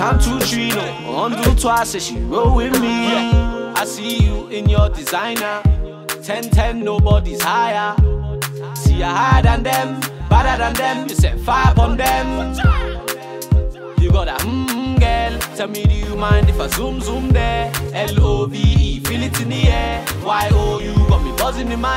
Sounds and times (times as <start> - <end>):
Music: 0.0 - 21.9.